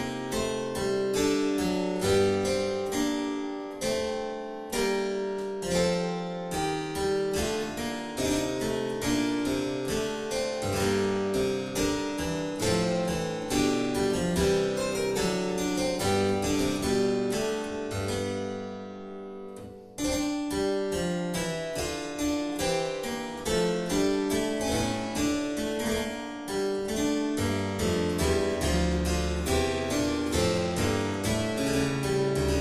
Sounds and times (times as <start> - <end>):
Harpsichord: 0.0 - 32.6.